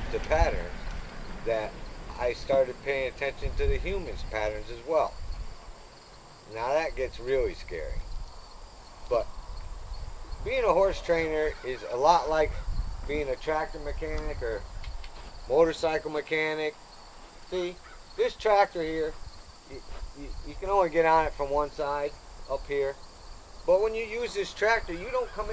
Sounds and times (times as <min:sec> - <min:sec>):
Speech: 0:00.0 - 0:00.7, 0:01.5 - 0:05.1, 0:06.5 - 0:08.0, 0:10.4 - 0:14.6, 0:15.5 - 0:16.8, 0:17.5 - 0:23.0, 0:23.7 - 0:25.5.